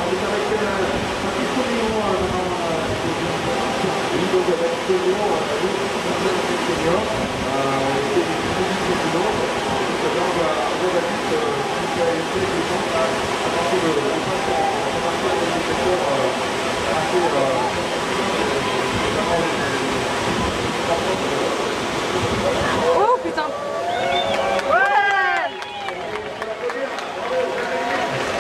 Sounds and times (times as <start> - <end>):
Waves, surf: 0.0 - 28.4
Wind noise (microphone): 0.5 - 3.6, 6.8 - 10.0, 16.7 - 21.3, 21.9 - 23.0.